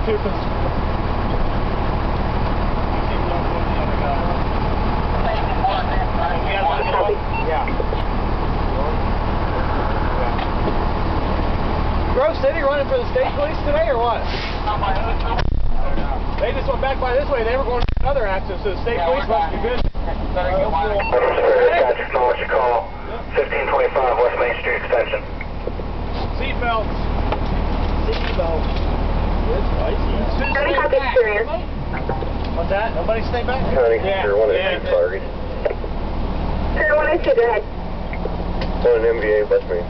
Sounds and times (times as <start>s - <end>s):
Car: 0.0s - 39.8s.